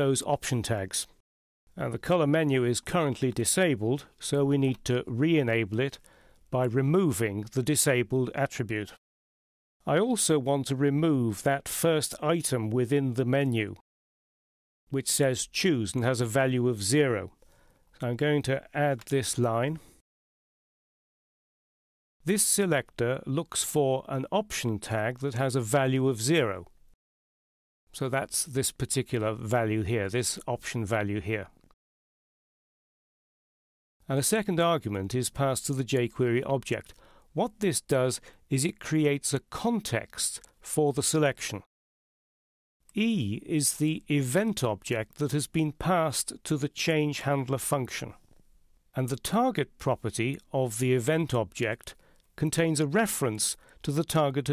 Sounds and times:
Speech: 0.0s - 1.2s, 1.8s - 6.0s, 6.6s - 9.0s, 9.8s - 13.8s, 14.9s - 17.4s, 18.0s - 19.9s, 22.2s - 26.7s, 28.0s - 31.6s, 34.0s - 41.7s, 42.9s - 48.2s, 49.0s - 54.5s.

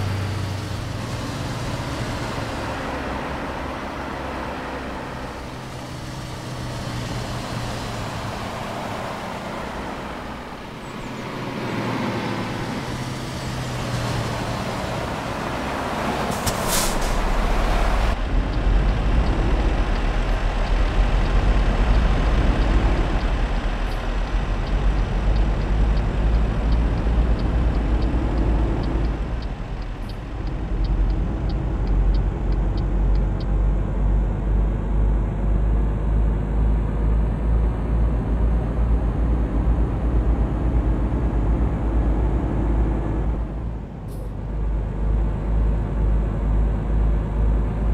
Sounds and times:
Car: 0.0s - 47.9s
Truck: 0.0s - 47.9s.

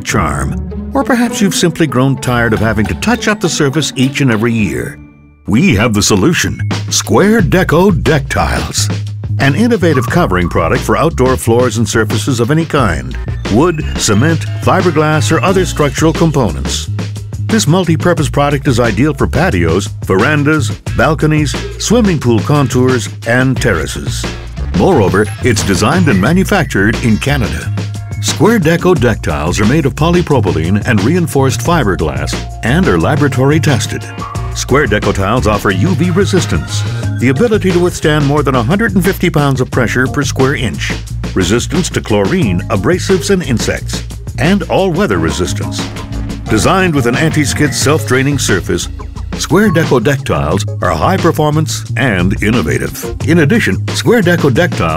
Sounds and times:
Speech: 0.0s - 16.9s, 17.5s - 45.9s, 46.5s - 54.9s
Music: 0.0s - 54.9s.

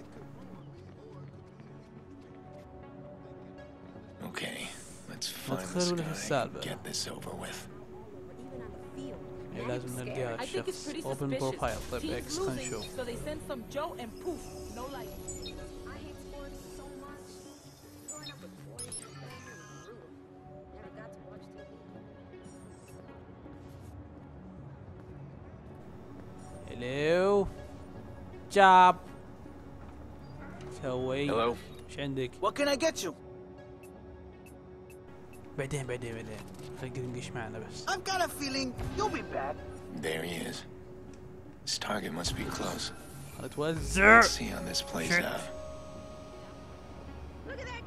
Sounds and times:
Music: 0.0s - 47.8s.

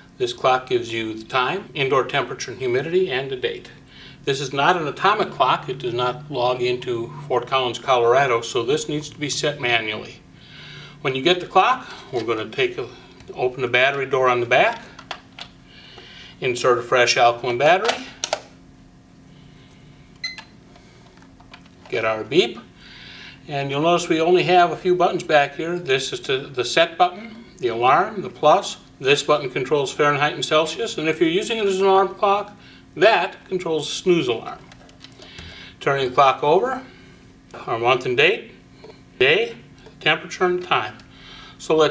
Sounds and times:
Speech: 0.2s - 10.2s, 11.0s - 14.9s, 16.4s - 18.0s, 21.9s - 22.7s, 23.5s - 34.7s, 35.8s - 36.9s, 37.6s - 38.6s, 39.2s - 41.0s, 41.6s - 41.9s.

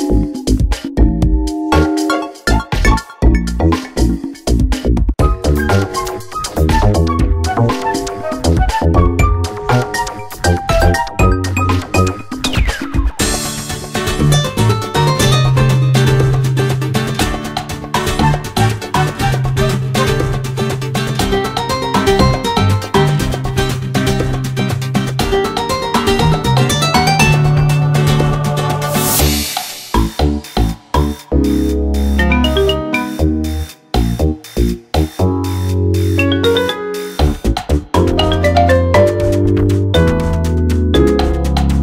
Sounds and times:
Video game music: 0.0s - 4.6s, 5.2s - 17.3s, 17.9s - 24.3s, 25.2s - 29.6s, 31.5s - 33.8s, 35.3s - 37.4s, 38.0s - 41.8s.

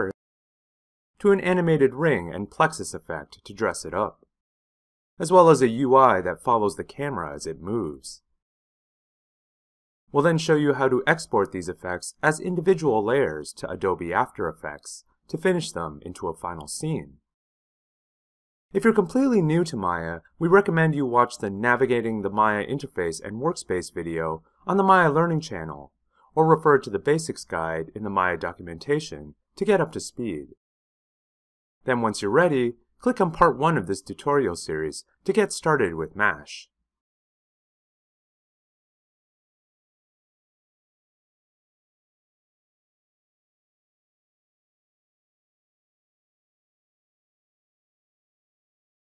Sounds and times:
Narration, monologue: 0.0s - 0.2s, 1.2s - 4.3s, 5.2s - 8.4s, 10.1s - 17.2s, 18.7s - 30.6s, 31.8s - 36.7s.

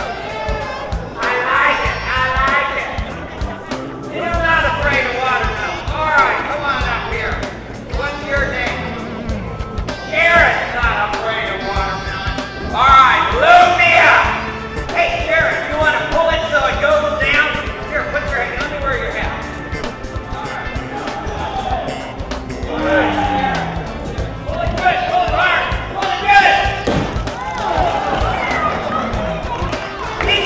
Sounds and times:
Music: 0.0s - 30.4s
Speech: 1.2s - 3.2s, 4.1s - 9.1s, 10.1s - 19.5s, 24.5s - 26.8s, 30.2s - 30.4s.

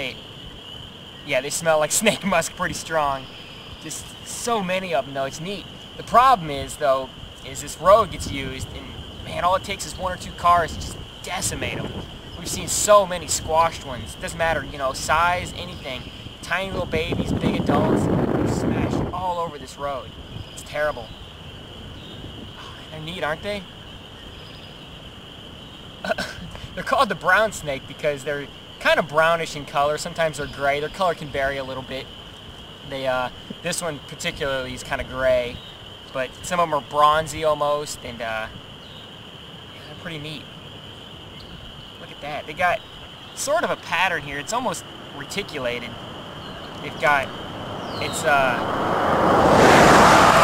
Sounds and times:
Speech: 0.0s - 0.2s, 1.3s - 21.1s, 22.6s - 23.7s, 26.1s - 32.1s, 32.8s - 38.5s, 39.8s - 40.5s, 42.0s - 42.8s, 43.4s - 46.0s, 46.8s - 47.3s, 48.0s - 48.6s.

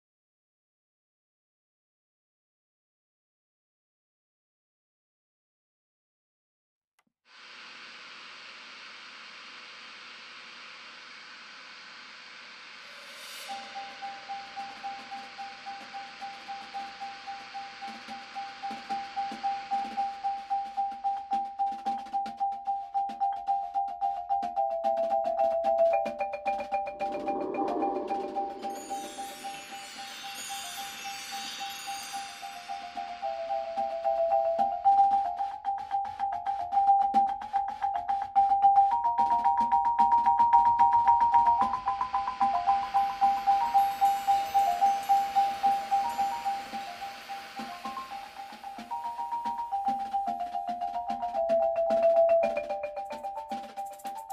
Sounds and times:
Percussion: 7.3s - 54.3s.

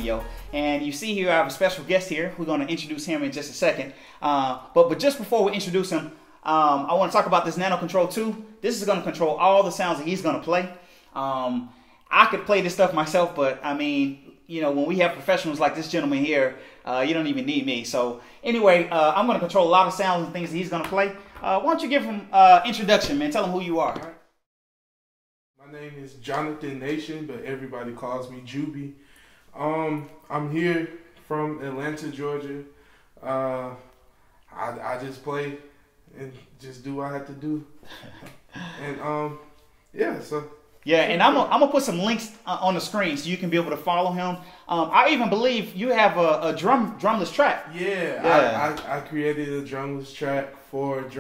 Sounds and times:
Speech: 0.0s - 24.2s, 25.6s - 29.0s, 29.6s - 33.9s, 34.5s - 37.8s, 38.8s - 51.2s.

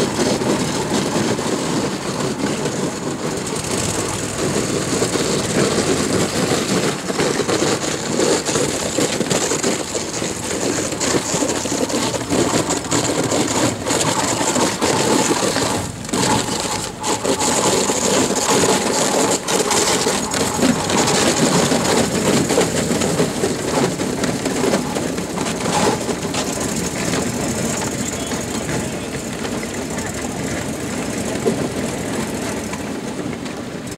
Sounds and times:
Motorboat, speedboat: 0.0s - 33.9s.

